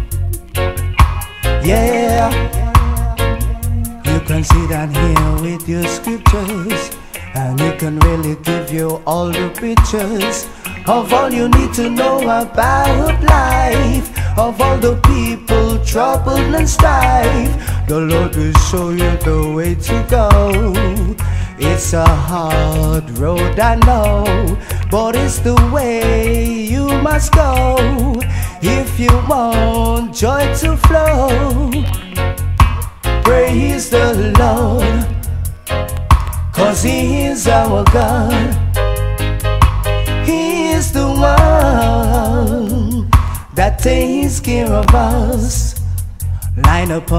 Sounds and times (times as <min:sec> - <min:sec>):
Music: 0:00.0 - 0:47.1.